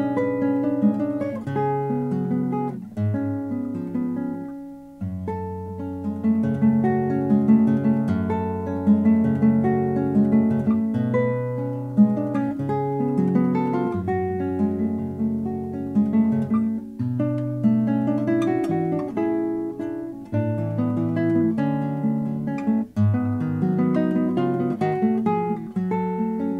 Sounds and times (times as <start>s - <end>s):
Plucked string instrument: 0.0s - 26.5s.